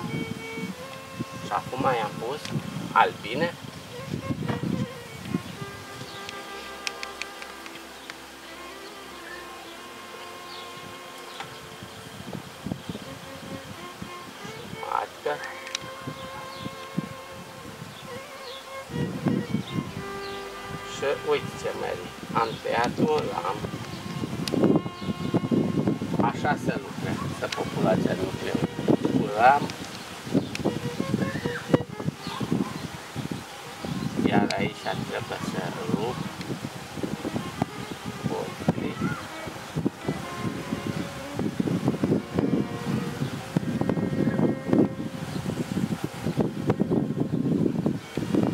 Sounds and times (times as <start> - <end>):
Bee, wasp, etc.: 0.0 - 48.5
Fly, housefly: 0.0 - 48.5.